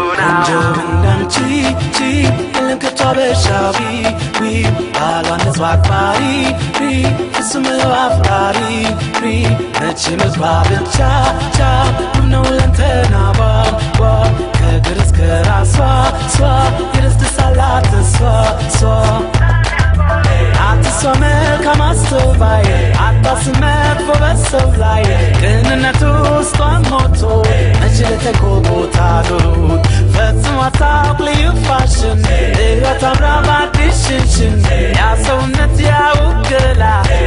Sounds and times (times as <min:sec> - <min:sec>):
Theme music: 0:00.0 - 0:37.2.